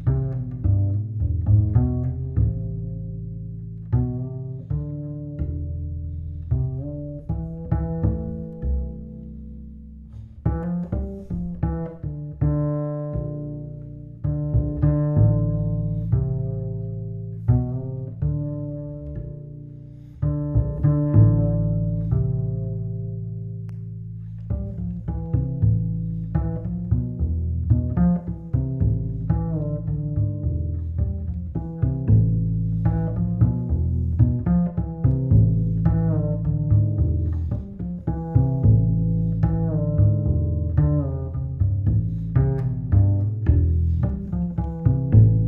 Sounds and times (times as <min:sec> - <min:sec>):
Music: 0:00.0 - 0:45.4.